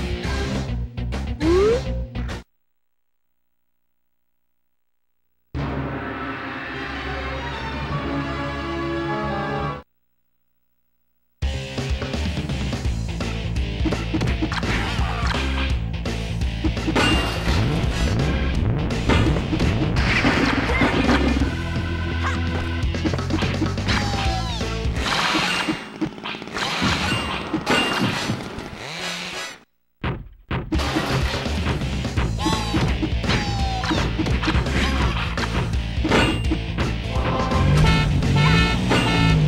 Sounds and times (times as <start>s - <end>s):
Music: 0.0s - 2.4s, 5.7s - 9.8s, 11.5s - 20.0s, 20.6s - 25.0s, 30.8s - 39.4s.